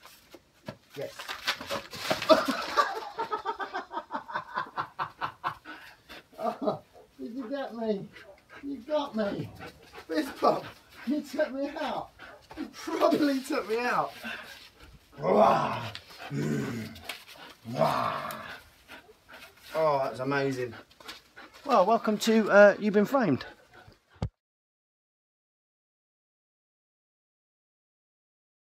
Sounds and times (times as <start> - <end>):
Speech: 0.9 - 1.3, 7.2 - 14.2, 19.7 - 20.8, 21.7 - 23.5
Dog: 6.5 - 13.5, 16.9 - 19.8.